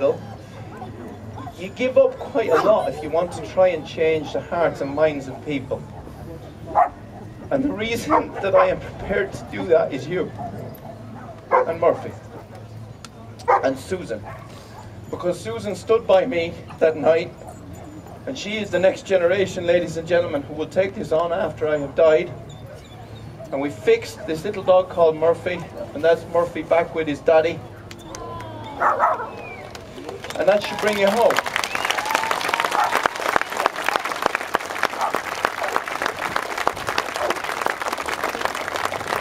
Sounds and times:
Bow-wow: 2.4 - 3.1, 6.1 - 7.3, 10.4 - 12.6, 13.5 - 14.9, 28.8 - 29.4, 35.0 - 35.8.

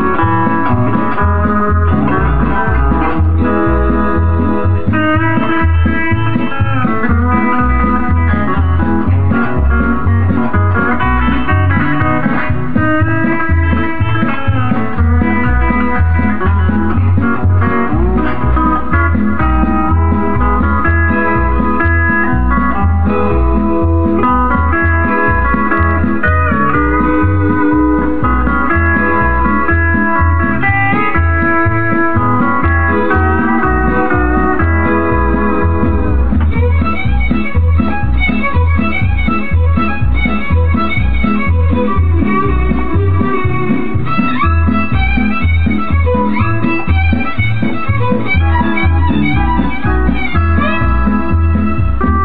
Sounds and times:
Guitar: 0.0 - 52.2.

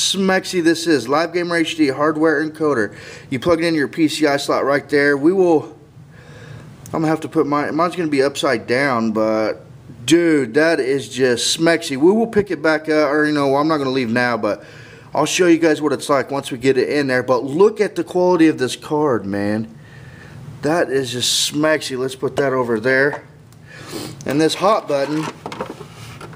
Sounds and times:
Speech: 0.0 - 5.8, 6.9 - 14.6, 15.2 - 19.8, 20.6 - 23.4, 24.2 - 25.4
Inside, small room: 0.0 - 26.3.

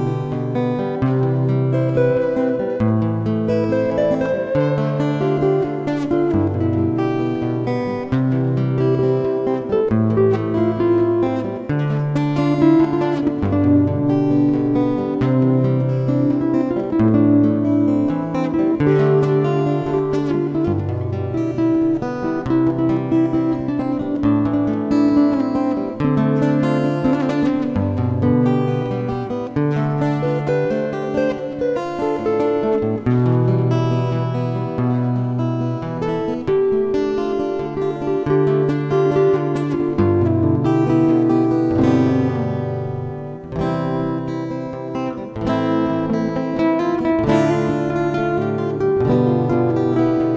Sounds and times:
Acoustic guitar: 0.0 - 50.3.

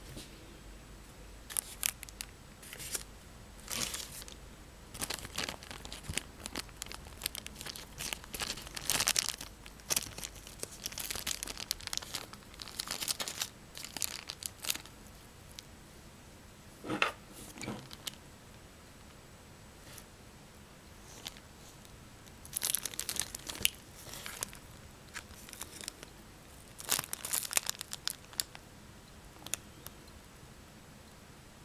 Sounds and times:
Inside, small room: 0.0 - 31.6
Crumpling, crinkling: 1.5 - 4.4, 5.0 - 15.0, 17.8 - 18.2, 21.0 - 28.6, 29.4 - 29.6.

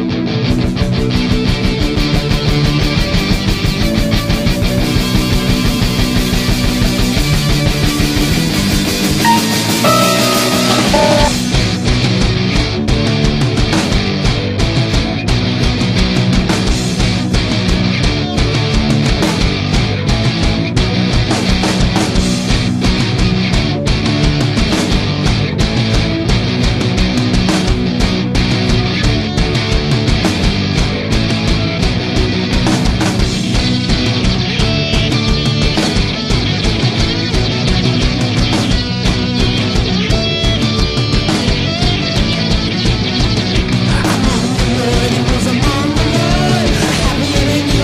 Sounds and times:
Music: 0.0 - 47.8.

